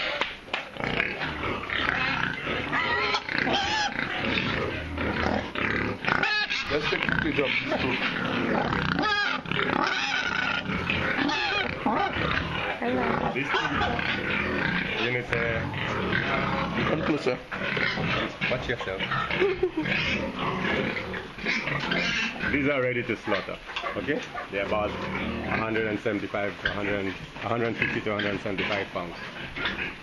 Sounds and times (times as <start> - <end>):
Oink: 0.0 - 30.0.